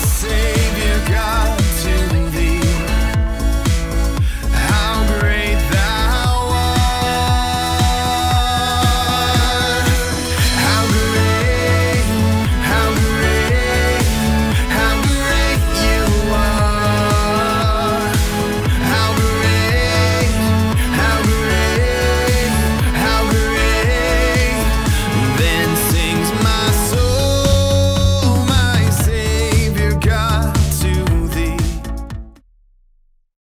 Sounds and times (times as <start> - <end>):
House music: 0.0 - 32.4.